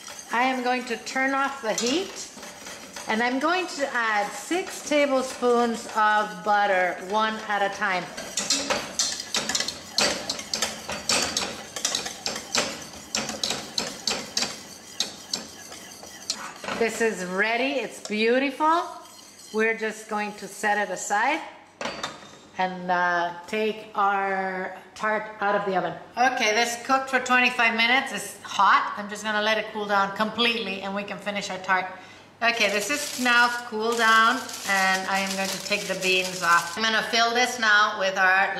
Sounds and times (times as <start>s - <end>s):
Stir: 0.0s - 17.3s, 17.9s - 20.5s, 32.6s - 36.9s.